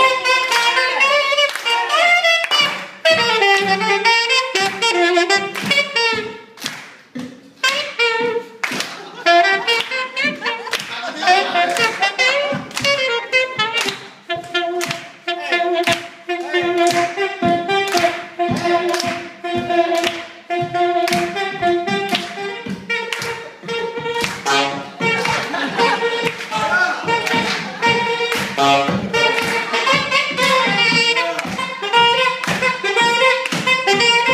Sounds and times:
Jazz: 0.0 - 34.3
Clapping: 6.6 - 7.0, 8.6 - 9.0, 10.6 - 11.0
Funk: 7.2 - 34.3.

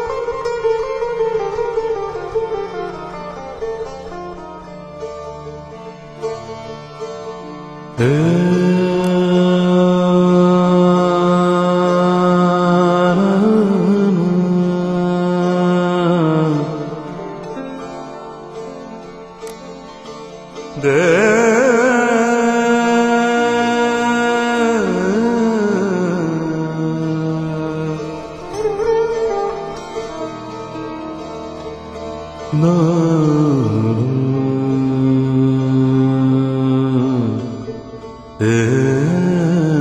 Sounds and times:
Sitar: 0.0 - 39.8.

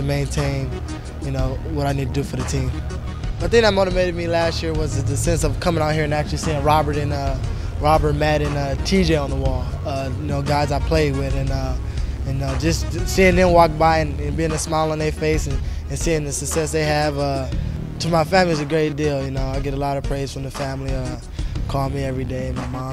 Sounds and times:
Speech: 0.0 - 2.8, 3.4 - 22.9
Music: 0.0 - 22.9.

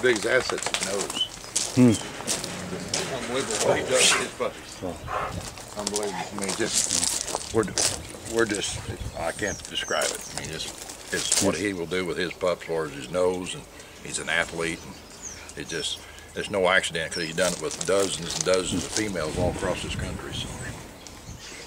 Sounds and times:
Speech: 0.0 - 2.0, 2.9 - 5.0, 5.8 - 15.0, 15.6 - 20.7.

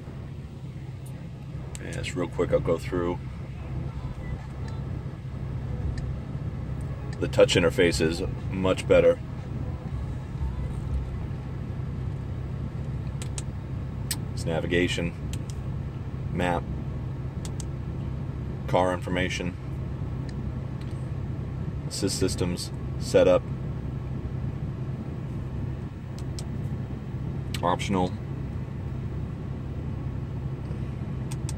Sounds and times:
Speech: 1.1 - 5.0, 7.2 - 9.2, 14.2 - 15.2, 16.3 - 16.7, 18.7 - 19.6, 21.9 - 23.4, 27.6 - 28.2.

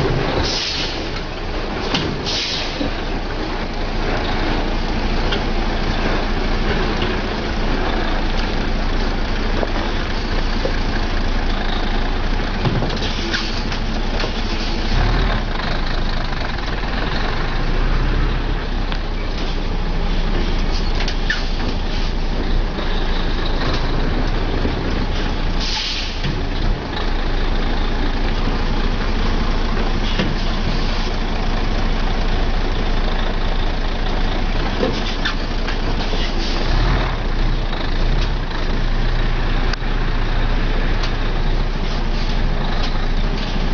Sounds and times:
Truck: 0.0 - 43.7.

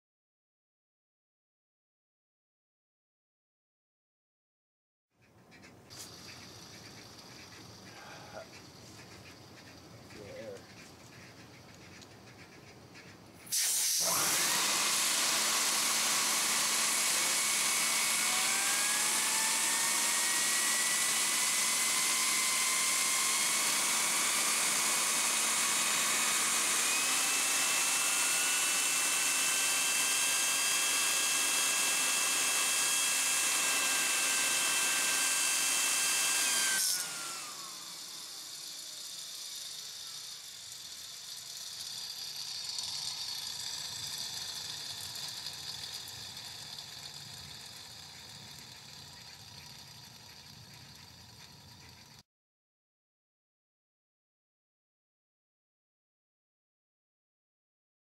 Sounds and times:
Drill: 13.5 - 52.2.

